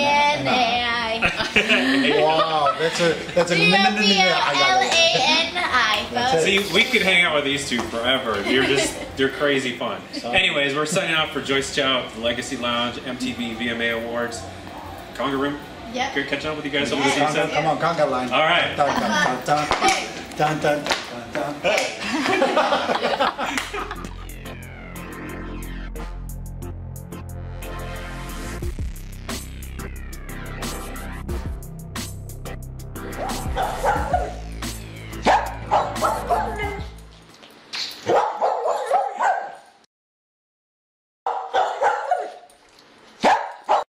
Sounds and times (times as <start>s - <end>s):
Bark: 33.2s - 34.4s, 35.2s - 36.8s, 38.0s - 39.7s, 41.3s - 42.5s, 43.2s - 43.9s
Bow-wow: 33.2s - 34.4s, 35.2s - 36.9s, 38.0s - 39.7s, 41.3s - 42.5s, 43.2s - 43.9s.